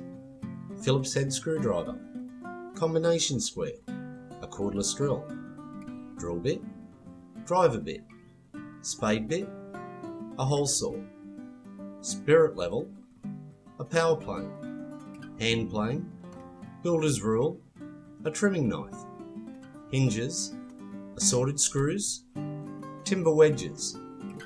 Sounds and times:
Music: 0:00.0 - 0:24.4
Speech: 0:00.8 - 0:02.0, 0:02.8 - 0:03.8, 0:04.4 - 0:05.3, 0:06.2 - 0:06.7, 0:07.5 - 0:08.0, 0:08.8 - 0:09.5, 0:10.4 - 0:11.0, 0:12.0 - 0:12.9, 0:13.8 - 0:14.5, 0:15.4 - 0:16.1, 0:16.8 - 0:17.6, 0:18.2 - 0:19.0, 0:19.9 - 0:20.6, 0:21.2 - 0:22.2, 0:23.1 - 0:24.0.

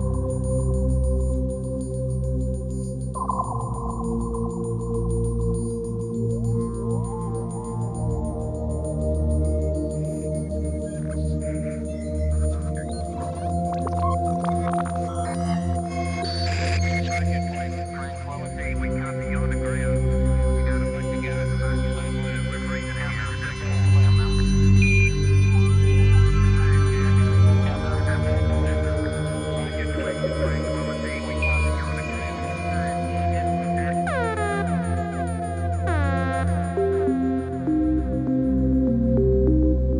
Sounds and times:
Music: 0:00.0 - 0:40.0
Speech: 0:10.8 - 0:35.2.

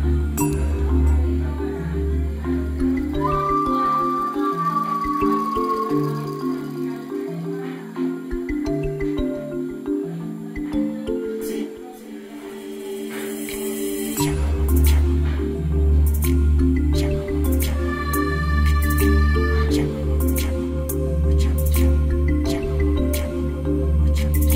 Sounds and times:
Music: 0:00.0 - 0:24.5.

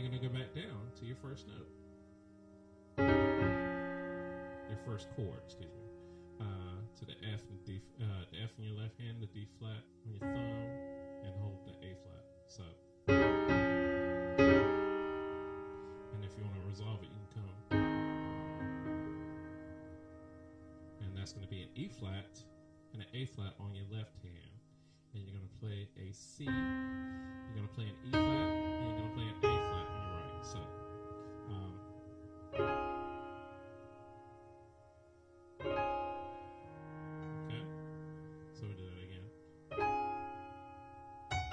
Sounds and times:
Piano: 0:00.0 - 0:41.5.

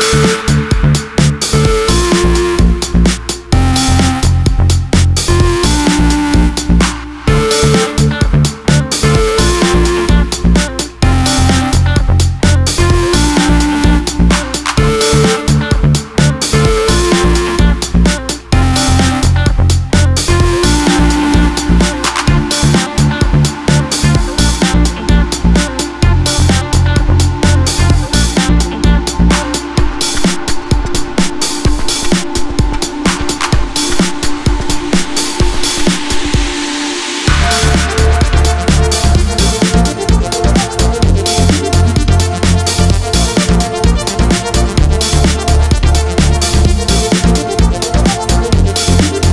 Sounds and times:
Music: 0:00.0 - 0:49.3.

